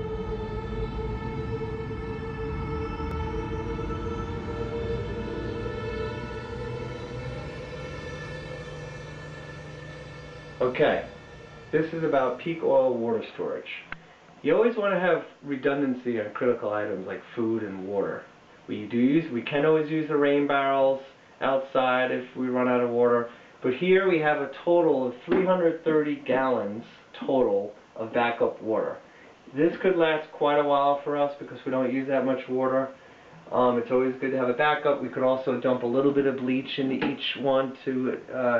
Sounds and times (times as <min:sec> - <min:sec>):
Speech: 0:10.6 - 0:11.1, 0:11.8 - 0:38.6.